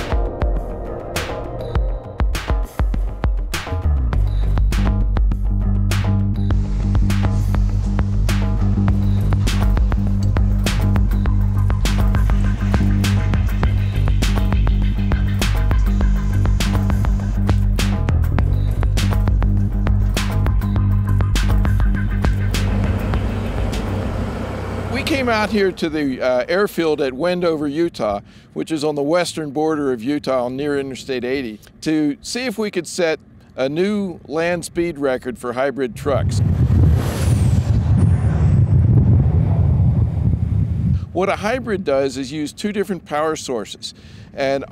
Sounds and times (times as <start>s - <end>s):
Music: 0.0s - 25.7s.